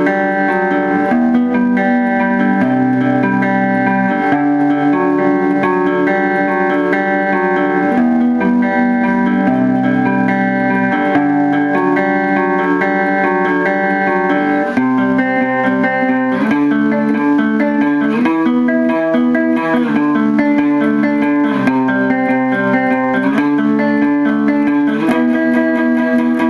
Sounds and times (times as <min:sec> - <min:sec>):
Electric guitar: 0:00.0 - 0:26.5.